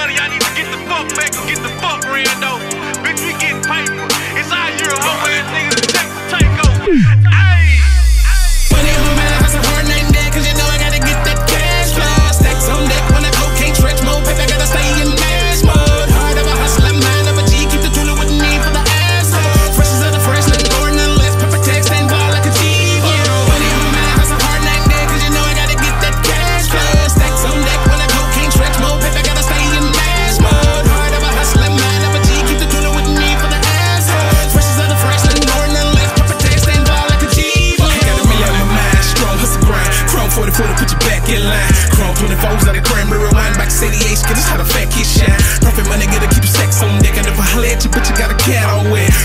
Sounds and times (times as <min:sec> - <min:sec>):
Rhythm and blues: 0:00.0 - 0:49.2.